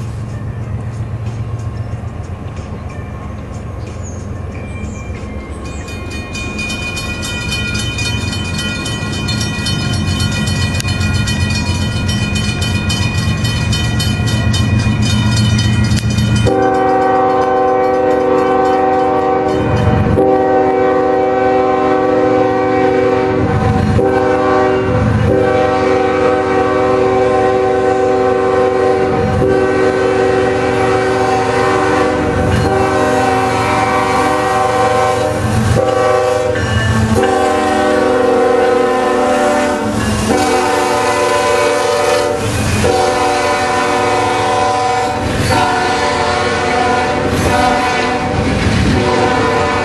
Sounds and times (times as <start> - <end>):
Railroad car, train wagon: 0.0 - 49.8
Train horn: 16.4 - 49.8.